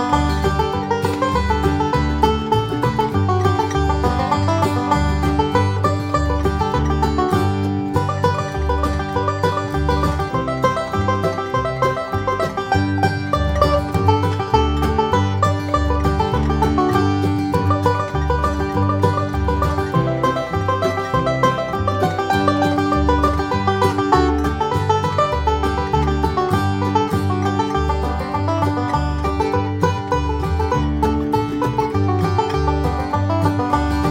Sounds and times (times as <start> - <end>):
Bluegrass: 0.0 - 34.1.